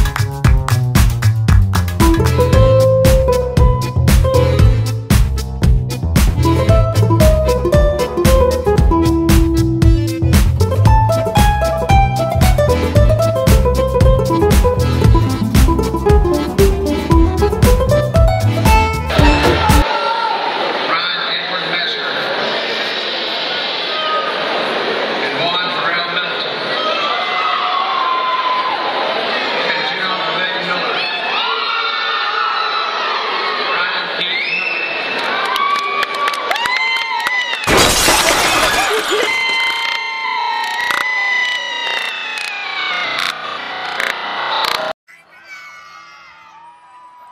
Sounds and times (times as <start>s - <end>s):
Inside, large room or hall: 18.6s - 37.7s, 39.2s - 47.3s
Speech: 19.8s - 22.6s, 25.2s - 27.2s, 29.6s - 31.6s, 45.1s - 46.5s.